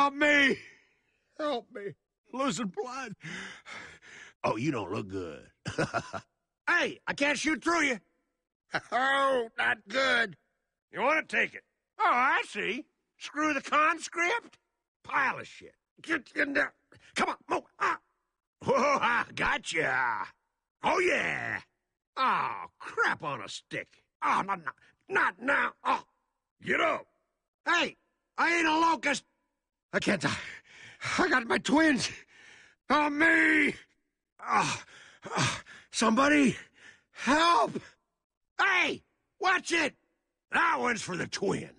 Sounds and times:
Speech: 0:00.0 - 0:00.7, 0:01.4 - 0:03.2, 0:04.4 - 0:05.6, 0:06.7 - 0:08.0, 0:08.7 - 0:18.0, 0:18.6 - 0:27.1, 0:27.7 - 0:29.3, 0:29.9 - 0:30.5, 0:31.1 - 0:32.2, 0:32.9 - 0:34.7, 0:36.0 - 0:37.9, 0:38.6 - 0:41.7.

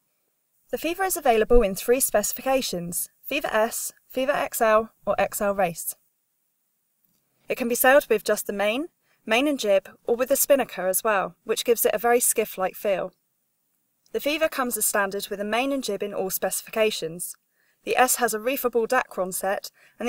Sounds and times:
Speech: 0:00.8 - 0:06.0, 0:07.5 - 0:13.1, 0:14.2 - 0:20.0.

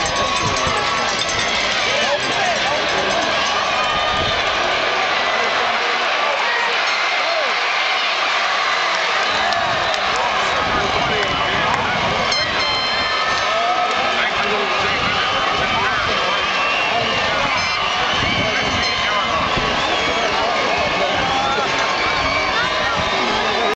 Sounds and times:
Speech: 0:00.0 - 0:03.5, 0:05.1 - 0:07.6, 0:09.4 - 0:23.7.

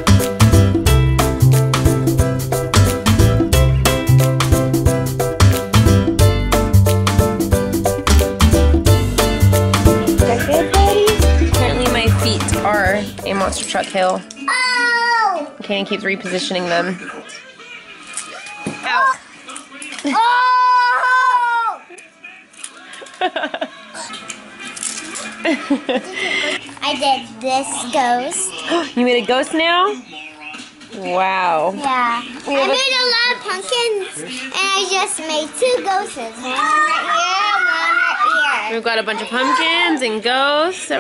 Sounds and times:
Child speech, kid speaking: 0:10.3 - 0:11.2, 0:14.4 - 0:15.6, 0:26.8 - 0:28.7, 0:31.8 - 0:40.0.

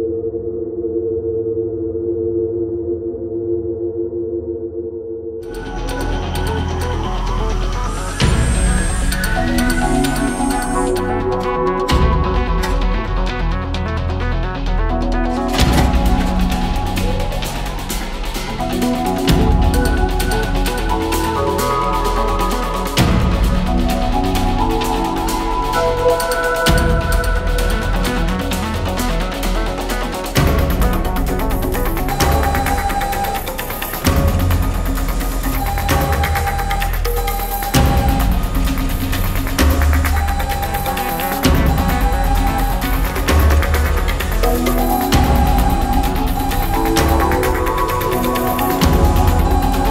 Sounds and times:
Music: 0:05.4 - 0:49.9.

